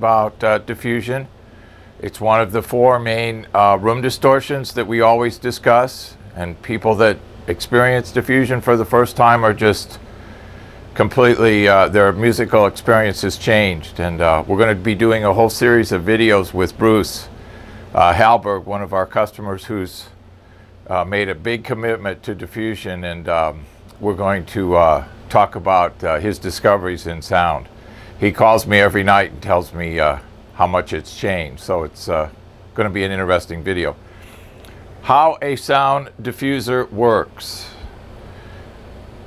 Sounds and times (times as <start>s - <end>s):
Speech: 0.0s - 1.3s, 2.0s - 10.0s, 11.0s - 17.3s, 17.9s - 20.2s, 20.9s - 34.0s, 35.0s - 37.9s.